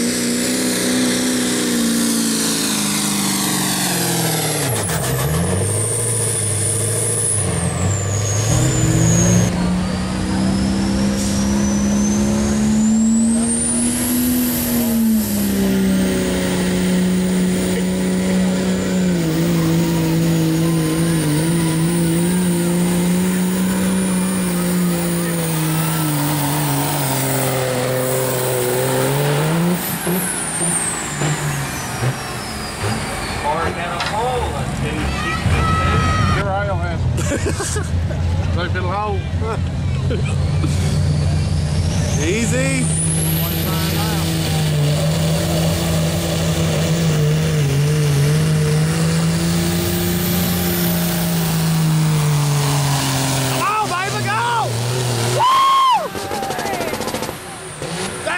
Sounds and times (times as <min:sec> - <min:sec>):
Medium engine (mid frequency): 0:00.0 - 0:58.3
Truck: 0:00.0 - 0:58.3.